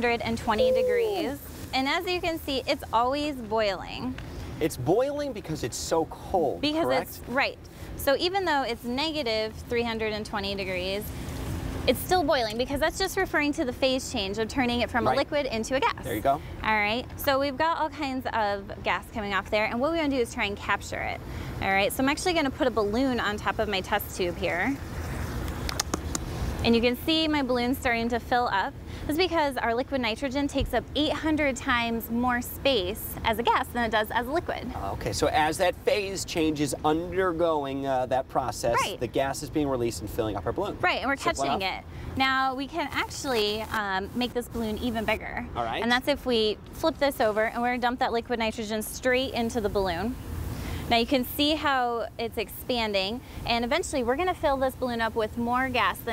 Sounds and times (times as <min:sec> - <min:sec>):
Speech: 0:06.6 - 0:10.8, 0:11.9 - 0:20.7, 0:38.5 - 0:48.6.